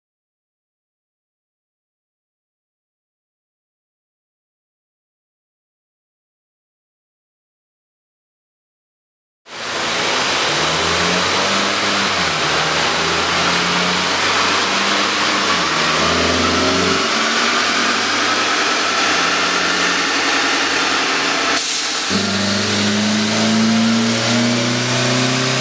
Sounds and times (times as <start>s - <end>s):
Car: 9.5s - 25.6s.